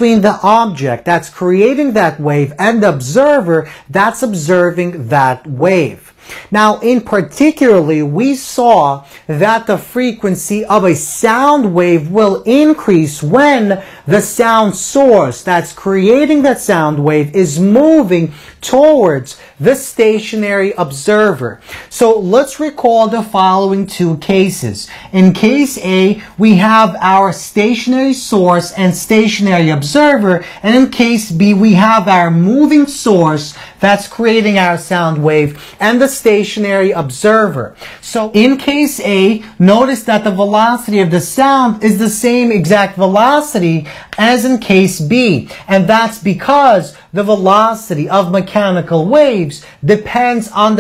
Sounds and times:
Speech: 0:00.0 - 0:50.8.

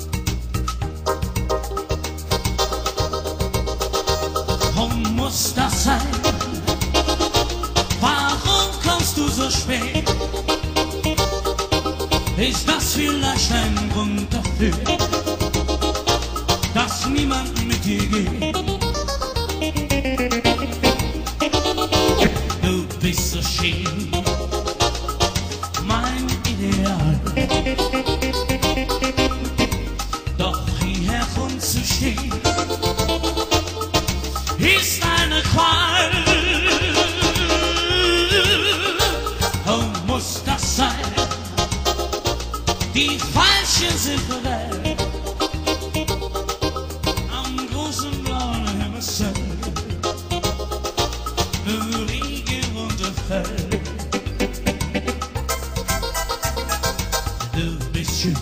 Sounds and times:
Blues: 0:00.0 - 0:58.4.

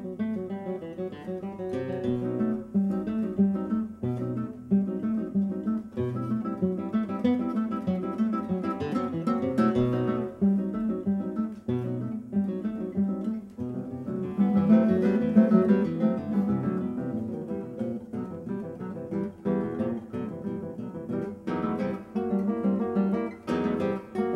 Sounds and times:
Acoustic guitar: 0:00.0 - 0:24.3
Strum: 0:00.0 - 0:24.3.

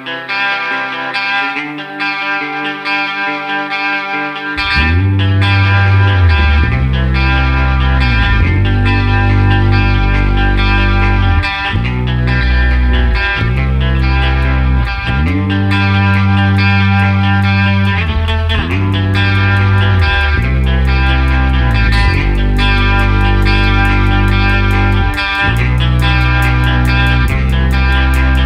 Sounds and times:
Music: 0:00.0 - 0:28.4.

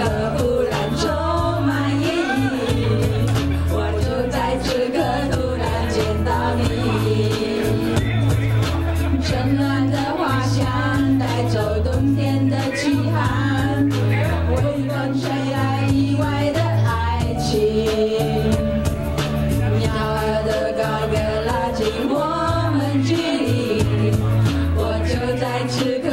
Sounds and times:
Choir: 0:00.0 - 0:18.9, 0:19.6 - 0:26.1.

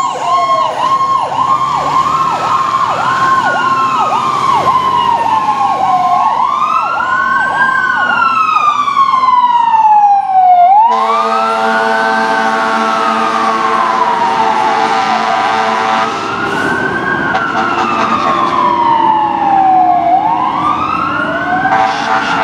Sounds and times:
Vehicle: 0:00.0 - 0:22.4.

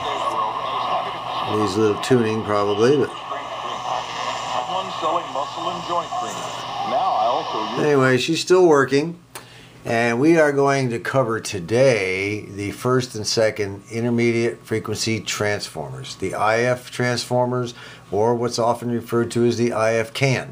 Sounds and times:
Radio: 0:00.0 - 0:08.2
Speech: 0:00.0 - 0:09.2, 0:09.9 - 0:20.5.

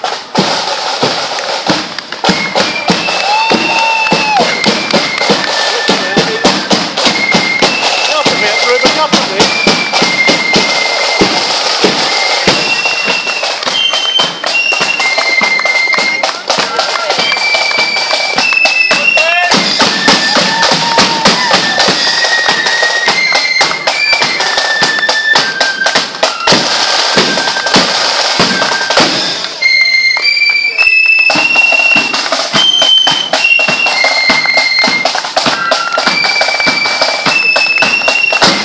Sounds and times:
Music: 0:00.0 - 0:38.6
Walk, footsteps: 0:30.1 - 0:31.6.

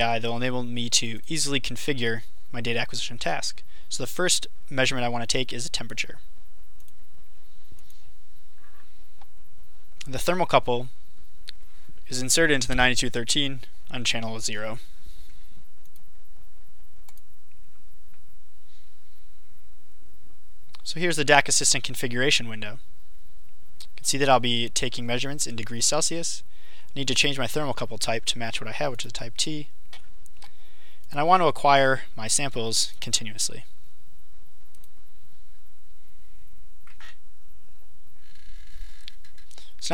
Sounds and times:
Speech: 0:00.0 - 0:06.3, 0:10.0 - 0:10.9, 0:12.1 - 0:14.8, 0:20.8 - 0:22.8, 0:23.9 - 0:26.4, 0:27.0 - 0:29.7, 0:31.1 - 0:33.7.

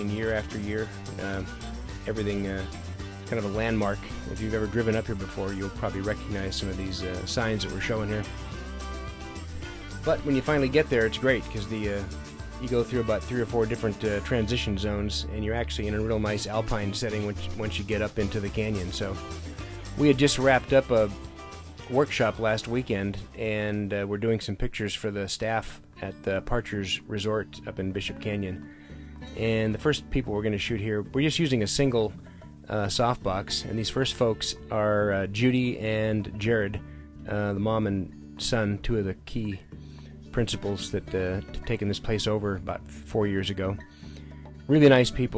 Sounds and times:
Speech: 0:00.0 - 0:08.4, 0:09.9 - 0:19.2, 0:20.0 - 0:21.2, 0:21.8 - 0:28.6, 0:29.4 - 0:39.7, 0:40.3 - 0:43.8, 0:44.7 - 0:45.3
Music: 0:00.0 - 0:45.3.

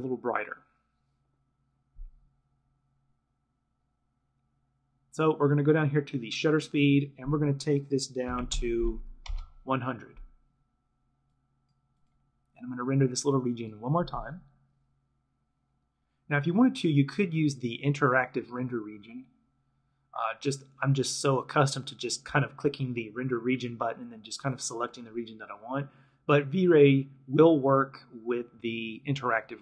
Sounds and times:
Speech: 0:00.0 - 0:00.7, 0:05.2 - 0:09.1, 0:09.7 - 0:10.2, 0:12.6 - 0:14.5, 0:16.3 - 0:19.4, 0:20.2 - 0:29.6.

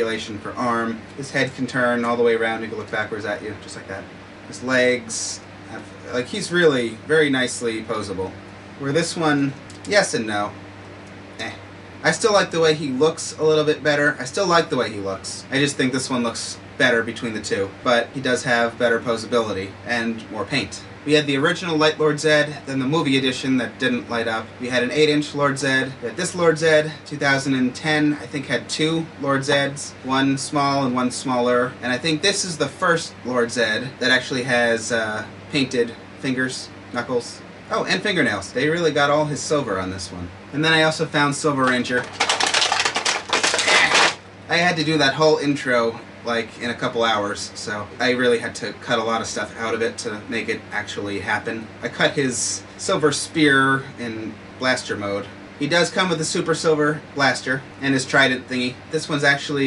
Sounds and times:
Speech: 0:00.0 - 0:10.6, 0:11.4 - 0:42.4, 0:43.5 - 0:59.6
Inside, small room: 0:00.0 - 0:59.6.

